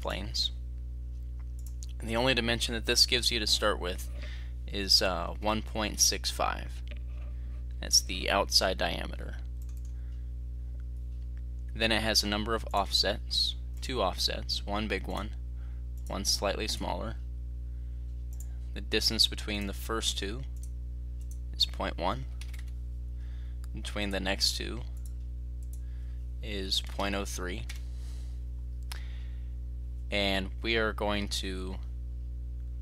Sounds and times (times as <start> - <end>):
Speech: 0.0 - 0.6, 2.0 - 6.8, 7.8 - 9.4, 11.8 - 15.4, 16.1 - 17.2, 18.8 - 20.6, 21.6 - 22.4, 23.8 - 25.0, 26.4 - 27.7, 30.1 - 31.9.